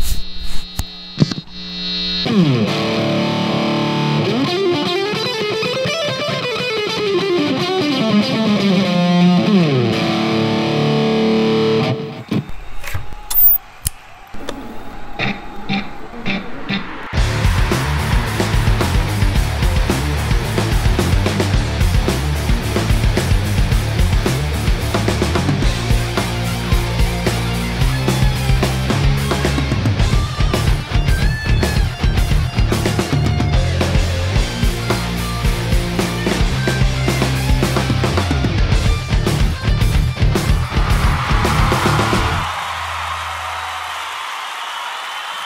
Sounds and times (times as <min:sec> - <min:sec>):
Bass guitar: 0:15.2 - 0:42.5.